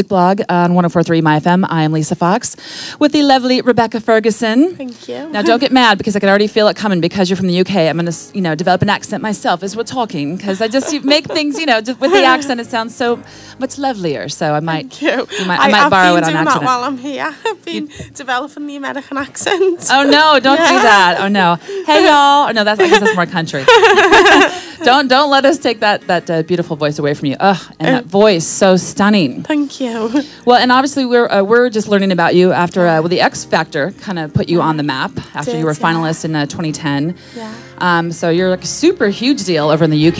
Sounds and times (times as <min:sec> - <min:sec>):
Speech: 0:35.4 - 0:36.2.